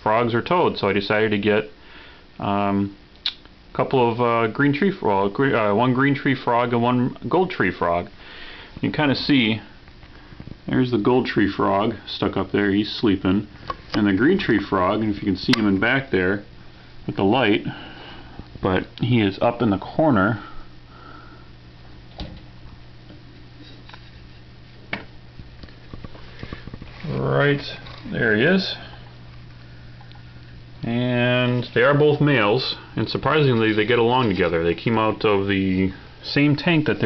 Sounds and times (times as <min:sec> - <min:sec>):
Speech: 0:00.0 - 0:01.8, 0:02.4 - 0:03.0, 0:03.7 - 0:08.2, 0:08.8 - 0:09.7, 0:10.7 - 0:16.5, 0:17.1 - 0:17.8, 0:18.6 - 0:20.5, 0:27.0 - 0:29.0, 0:30.8 - 0:37.0.